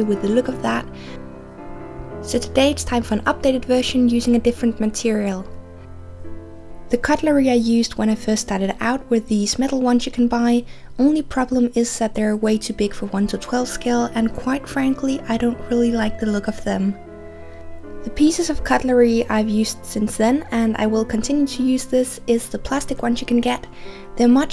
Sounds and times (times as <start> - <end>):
Speech: 0.0 - 0.9, 2.2 - 5.5, 6.9 - 17.0, 18.0 - 24.5
Music: 0.0 - 24.5.